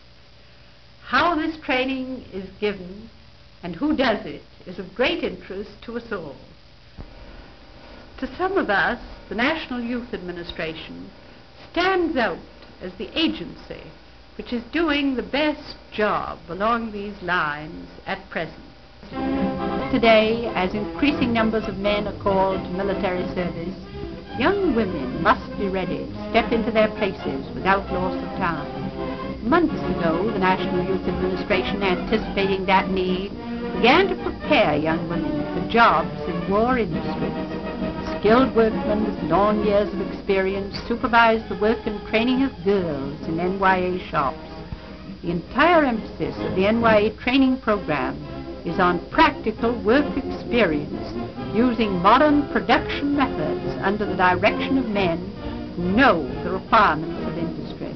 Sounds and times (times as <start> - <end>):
Music: 0.0 - 57.9
Narration, monologue: 0.6 - 57.9
Female speech, woman speaking: 1.1 - 6.5, 8.2 - 11.1, 11.7 - 18.6, 19.8 - 23.8, 24.4 - 28.8, 29.4 - 37.4, 38.0 - 44.4, 45.2 - 57.9.